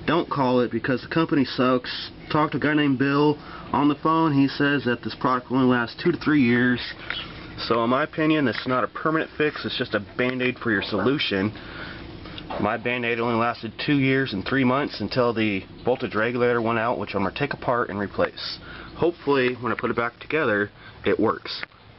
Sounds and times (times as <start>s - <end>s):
Speech: 0.0s - 11.6s, 12.5s - 21.7s.